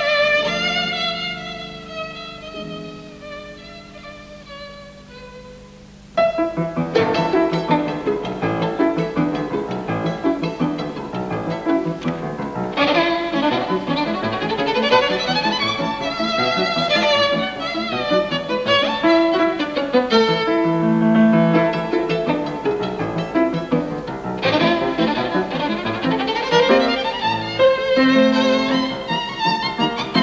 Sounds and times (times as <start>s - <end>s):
Violin, fiddle: 0.0s - 30.2s.